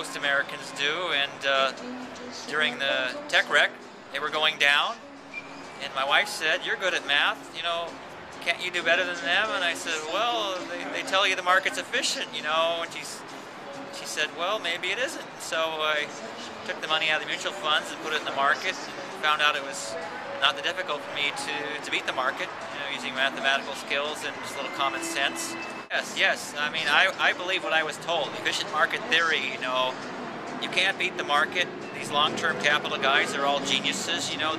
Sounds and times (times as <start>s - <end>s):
Speech: 0.0s - 1.8s, 2.5s - 5.0s, 5.8s - 13.2s, 14.0s - 16.1s, 16.7s - 30.0s, 30.6s - 34.5s
Music: 0.0s - 34.5s.